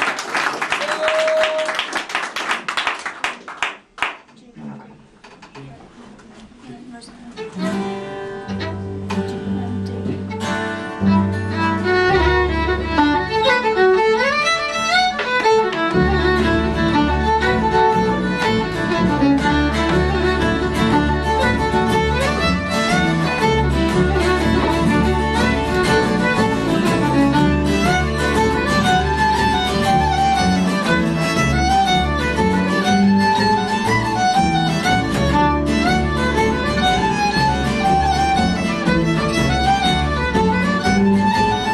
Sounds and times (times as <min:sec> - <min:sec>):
Violin, fiddle: 0:07.3 - 0:41.7.